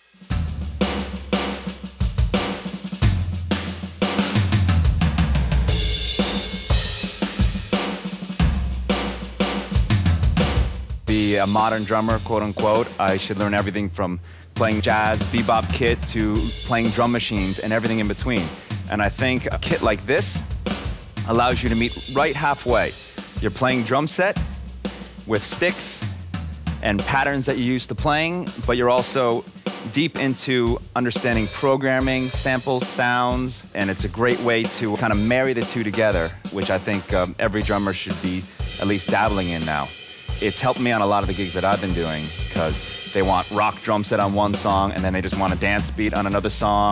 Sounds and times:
Drum: 0.0 - 46.9
Drum kit: 0.0 - 46.9
Speech: 11.1 - 20.4, 21.2 - 24.4, 25.3 - 26.1, 26.8 - 46.9.

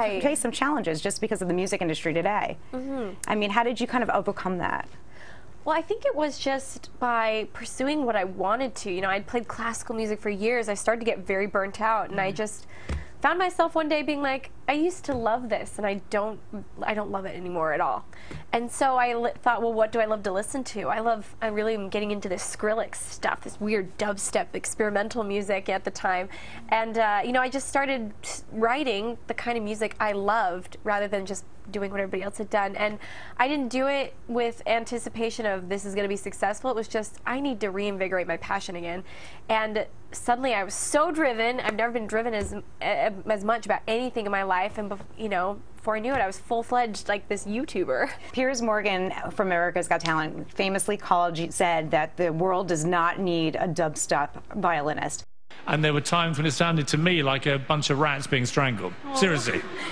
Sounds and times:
Speech: 0.0 - 4.9, 13.2 - 59.8.

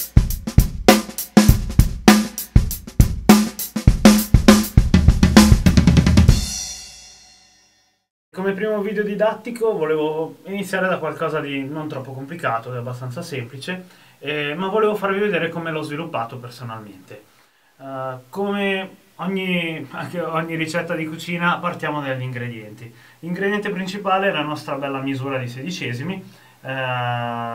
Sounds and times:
Music: 0.0 - 8.1
Speech: 8.4 - 27.5.

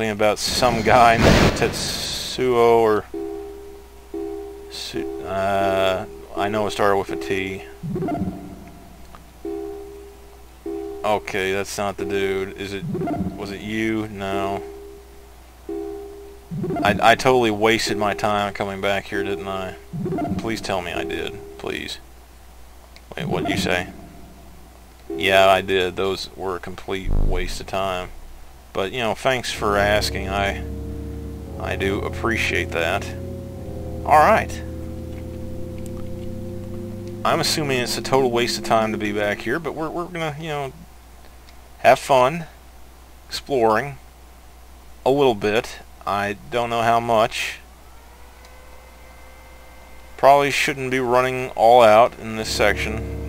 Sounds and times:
Speech: 0.0 - 3.1, 4.7 - 7.7, 11.1 - 14.7, 16.8 - 19.8, 20.4 - 22.0, 23.1 - 23.9, 25.2 - 28.1, 28.8 - 30.7, 31.6 - 33.2, 34.1 - 34.6, 37.3 - 40.8, 41.8 - 42.6, 43.3 - 44.0, 45.0 - 47.6, 50.2 - 53.0.

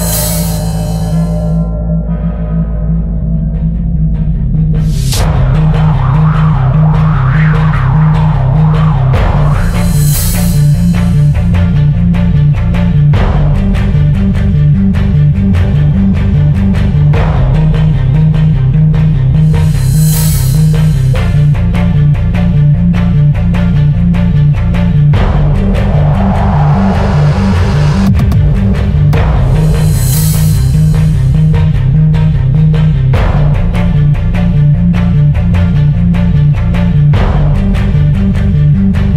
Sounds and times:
Music: 0.0 - 39.1.

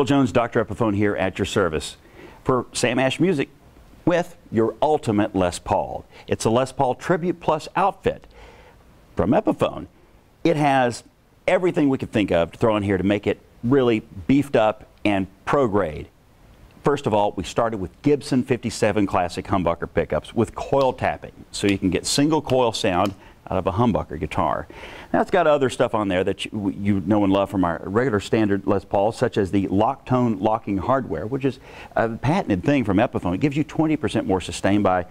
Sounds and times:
Speech: 0.0 - 8.3, 9.2 - 16.2, 16.8 - 35.1.

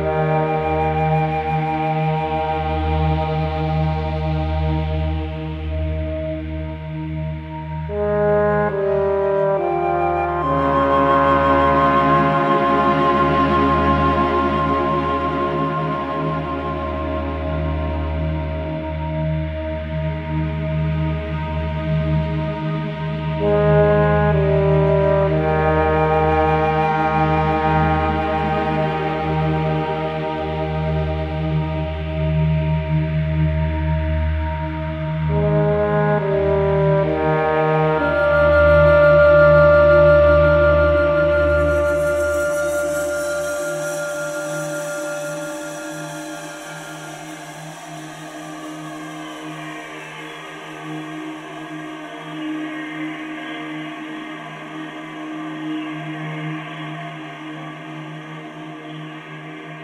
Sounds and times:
New-age music: 0.0 - 54.8.

